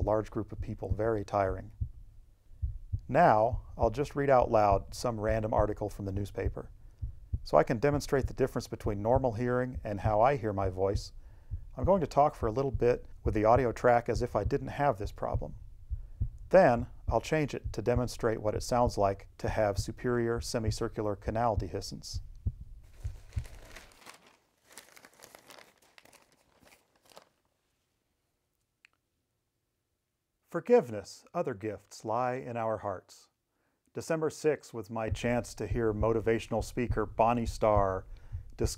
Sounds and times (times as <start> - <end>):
Speech: 0.0 - 1.7, 3.1 - 6.7, 7.5 - 11.2, 11.8 - 15.6, 16.5 - 22.2, 30.5 - 38.7
Crumpling, crinkling: 22.8 - 28.0.